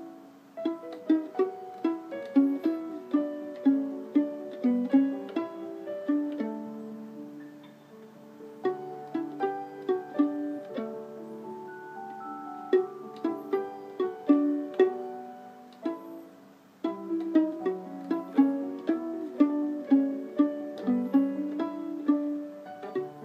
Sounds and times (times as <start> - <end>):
Pizzicato: 0.0 - 23.2.